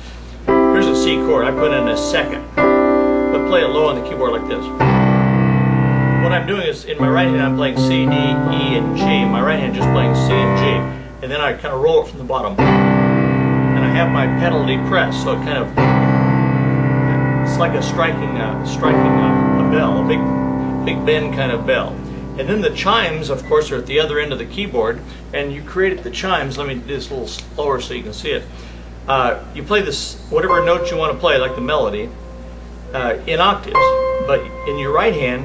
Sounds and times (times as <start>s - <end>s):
Music: 0.5s - 11.4s, 12.6s - 25.2s, 30.4s - 35.4s
Speech: 0.8s - 2.5s, 3.4s - 4.7s, 6.2s - 12.7s, 13.8s - 15.8s, 17.5s - 20.3s, 20.9s - 28.5s, 29.1s - 32.2s, 32.9s - 35.4s.